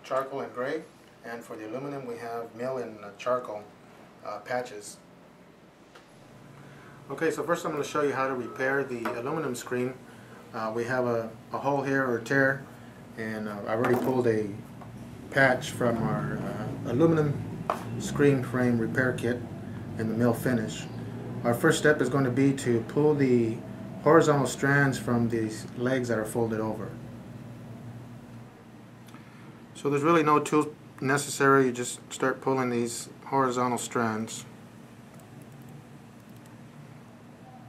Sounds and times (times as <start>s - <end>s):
Speech: 0.0s - 5.1s, 7.1s - 12.6s, 13.2s - 14.6s, 15.3s - 17.4s, 18.0s - 19.4s, 20.0s - 27.0s, 29.8s - 34.5s.